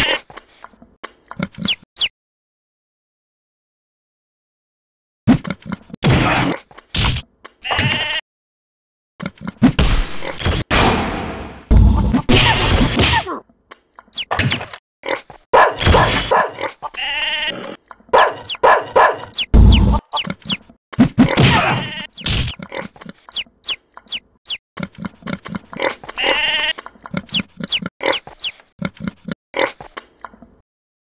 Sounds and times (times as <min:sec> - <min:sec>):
Bow-wow: 0:15.6 - 0:16.6, 0:18.2 - 0:19.3
Yip: 0:18.2 - 0:19.4.